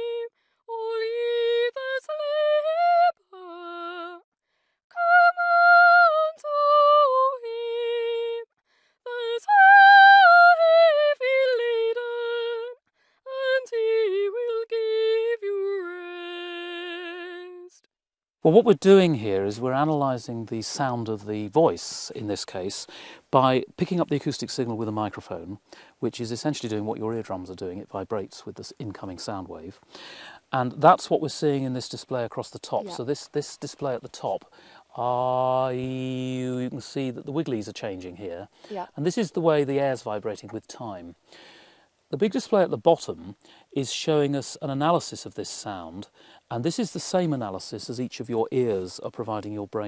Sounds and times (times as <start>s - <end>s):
Speech: 18.5s - 29.8s, 30.6s - 34.4s, 35.0s - 41.2s, 42.2s - 49.8s.